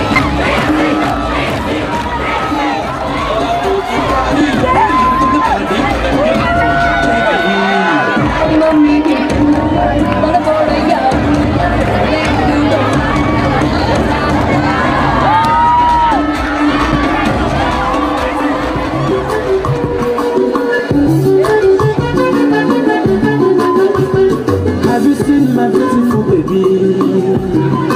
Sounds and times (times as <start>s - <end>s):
Cheering: 0.0s - 20.5s
Crowd: 0.0s - 27.9s.